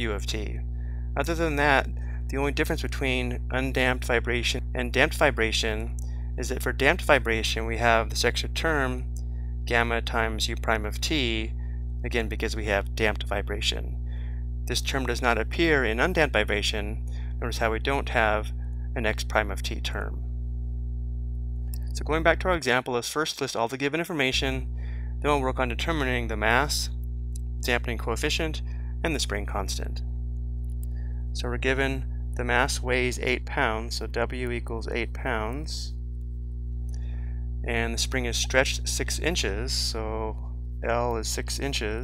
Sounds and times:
Speech: 0:00.0 - 0:00.6, 0:01.2 - 0:11.5, 0:12.1 - 0:13.9, 0:14.7 - 0:20.2, 0:21.8 - 0:26.9, 0:27.6 - 0:30.0, 0:31.4 - 0:35.9, 0:37.7 - 0:42.0.

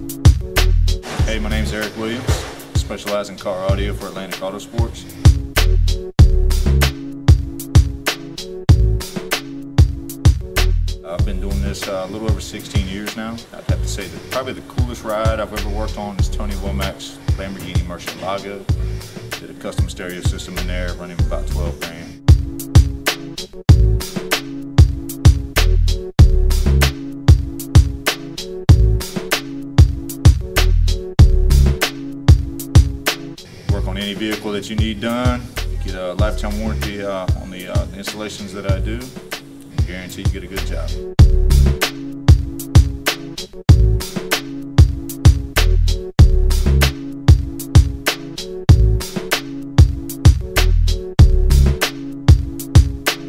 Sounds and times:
Music: 0:00.0 - 0:53.2
Speech: 0:01.1 - 0:05.2, 0:11.0 - 0:18.8, 0:19.4 - 0:22.2, 0:33.7 - 0:39.2, 0:39.8 - 0:41.0.

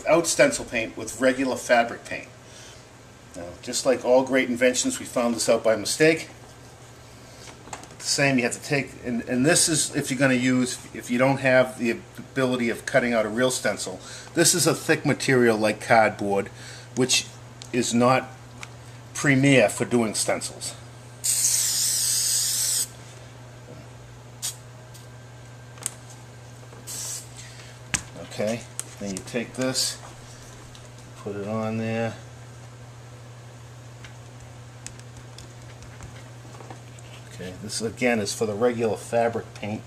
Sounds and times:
Speech: 0:00.0 - 0:02.3, 0:03.4 - 0:06.4, 0:08.0 - 0:18.4, 0:19.2 - 0:20.8, 0:28.2 - 0:30.1, 0:31.2 - 0:32.3, 0:37.3 - 0:39.8
Spray: 0:21.2 - 0:22.9, 0:26.9 - 0:27.3.

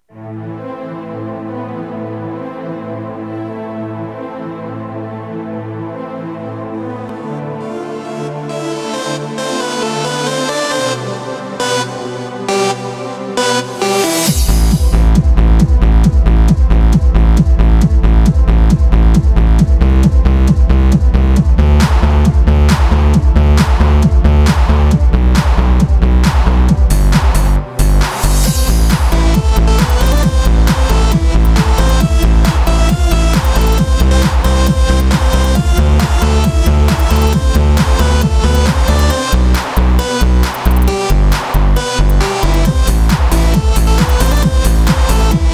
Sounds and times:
Techno: 0:07.1 - 0:45.5.

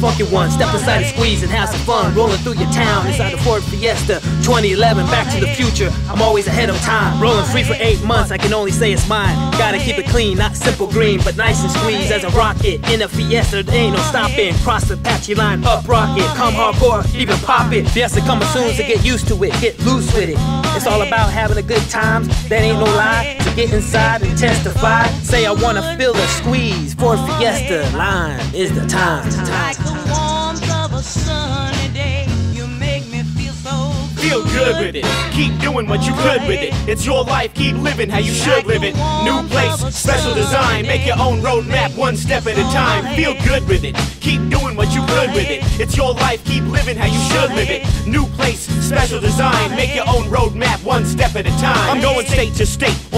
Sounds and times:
Music: 0:00.0 - 0:53.1.

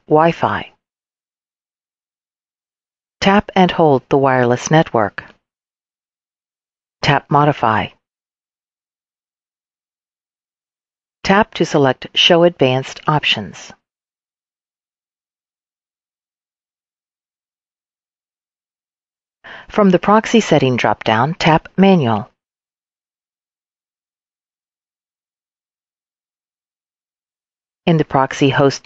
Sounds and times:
Speech: 0:00.0 - 0:00.7, 0:03.2 - 0:05.3, 0:07.0 - 0:08.0, 0:11.2 - 0:13.8, 0:19.7 - 0:22.3, 0:27.9 - 0:28.8.

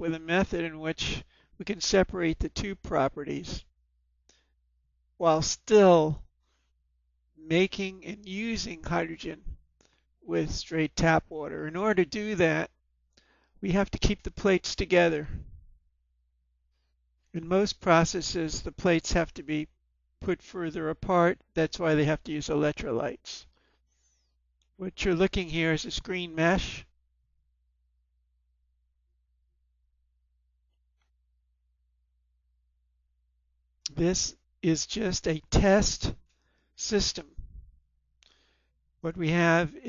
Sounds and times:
Speech: 0:00.0 - 0:03.7, 0:05.2 - 0:06.3, 0:07.4 - 0:09.6, 0:10.3 - 0:12.8, 0:13.6 - 0:15.4, 0:17.4 - 0:23.5, 0:24.8 - 0:27.0, 0:33.9 - 0:36.2, 0:36.8 - 0:37.4, 0:39.1 - 0:39.8.

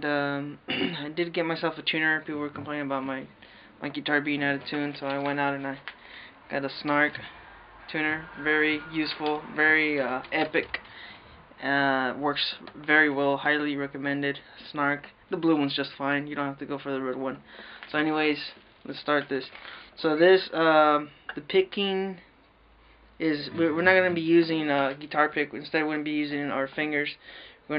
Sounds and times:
Speech: 0:00.0 - 0:05.9, 0:06.5 - 0:07.3, 0:07.9 - 0:10.8, 0:11.6 - 0:22.3, 0:23.2 - 0:27.7
Strum: 0:01.5 - 0:13.2, 0:23.4 - 0:24.7.

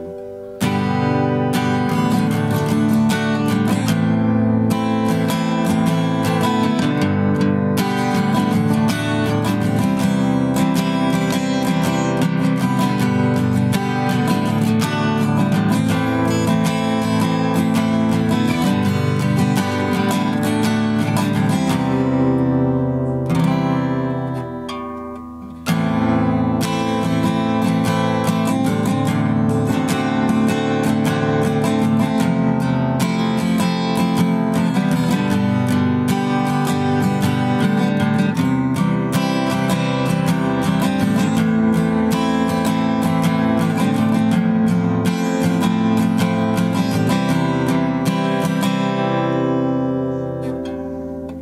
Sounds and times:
Acoustic guitar: 0:00.0 - 0:51.4
Strum: 0:00.0 - 0:51.4.

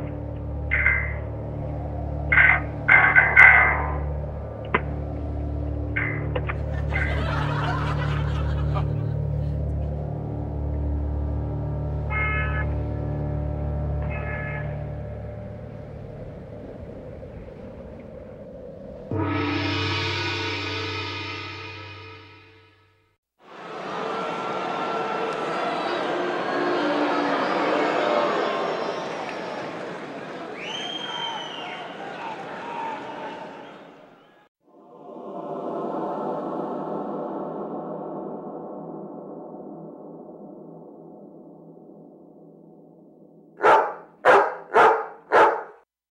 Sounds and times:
Music: 0:00.0 - 0:16.6, 0:19.1 - 0:23.2, 0:34.7 - 0:43.1.

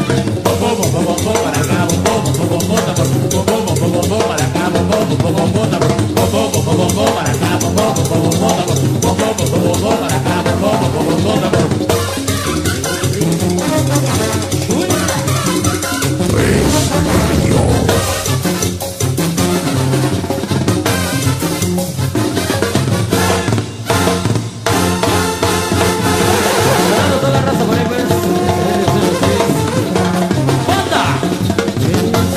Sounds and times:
Bass drum: 0:16.2 - 0:19.2
Drum roll: 0:16.2 - 0:19.2
Drum kit: 0:16.2 - 0:19.4.

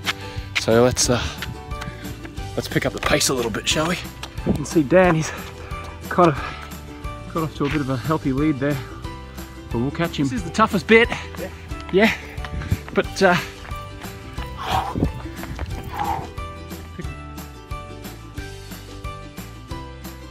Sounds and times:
Music: 0:00.0 - 0:20.3
Speech: 0:02.6 - 0:04.0, 0:09.7 - 0:12.2, 0:13.0 - 0:13.5.

